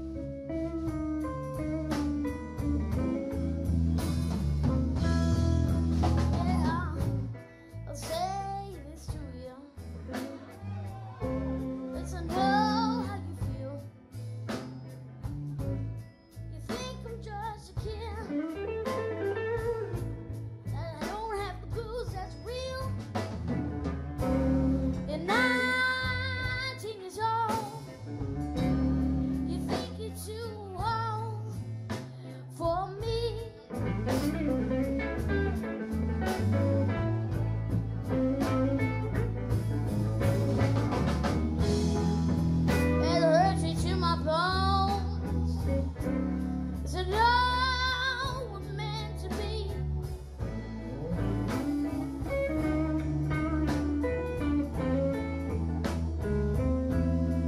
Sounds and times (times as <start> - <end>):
Electric guitar: 0.0 - 57.4.